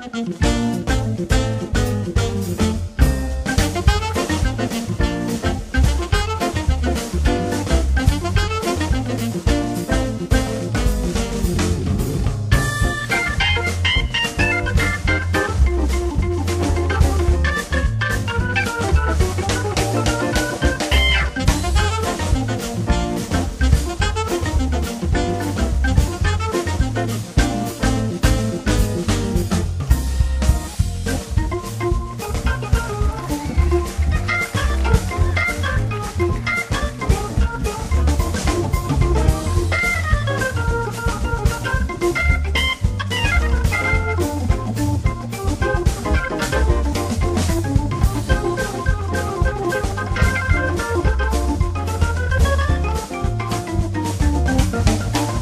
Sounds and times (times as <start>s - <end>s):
Hammond organ: 0.0s - 55.4s.